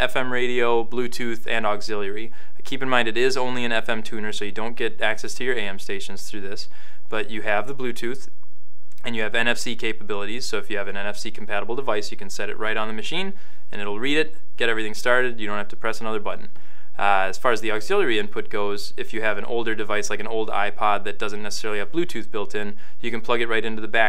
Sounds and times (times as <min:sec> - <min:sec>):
Speech: 0:00.0 - 0:08.3, 0:09.0 - 0:24.0.